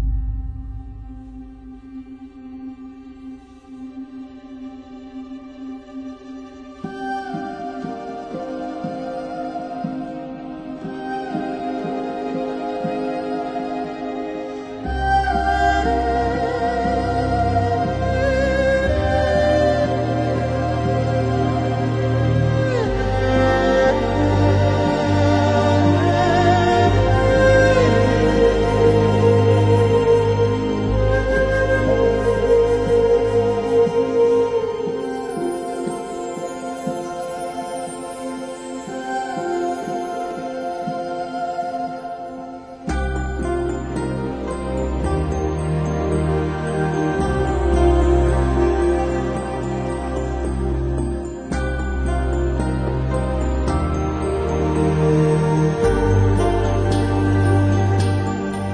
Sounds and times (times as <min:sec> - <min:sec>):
Soundtrack music: 0:00.0 - 0:58.7.